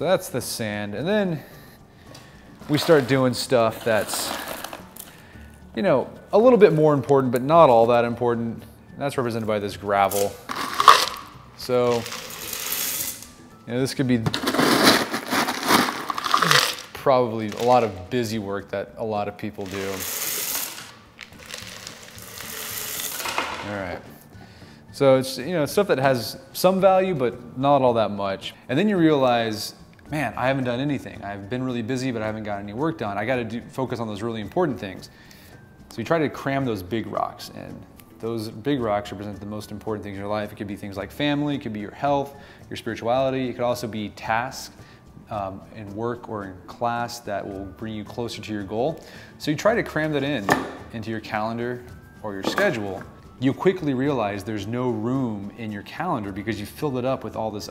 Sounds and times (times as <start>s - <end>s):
Music: 0.0s - 57.7s
Speech: 2.7s - 4.3s, 5.8s - 10.4s, 11.6s - 12.1s, 13.7s - 14.3s, 17.0s - 20.0s, 23.6s - 24.1s, 24.9s - 35.1s, 35.9s - 44.7s, 45.3s - 57.7s.